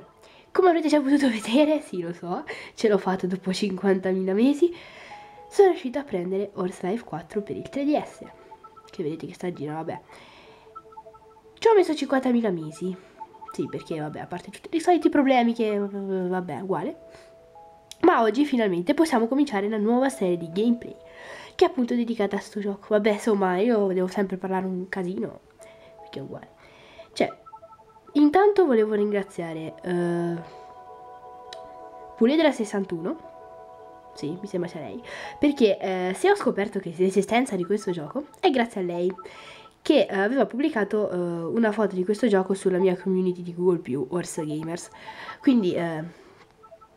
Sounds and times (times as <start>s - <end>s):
Speech: 0.6s - 4.8s, 5.5s - 8.3s, 8.9s - 10.0s, 11.6s - 13.0s, 13.6s - 17.0s, 18.0s - 21.0s, 21.6s - 25.4s, 26.1s - 26.5s, 28.2s - 30.5s, 32.2s - 33.2s, 34.2s - 39.2s, 39.8s - 46.1s.